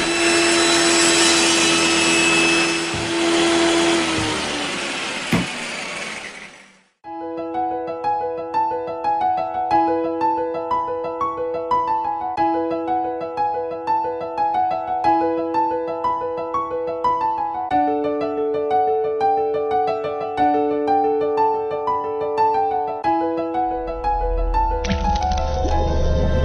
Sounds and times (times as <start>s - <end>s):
Music: 7.0s - 26.4s.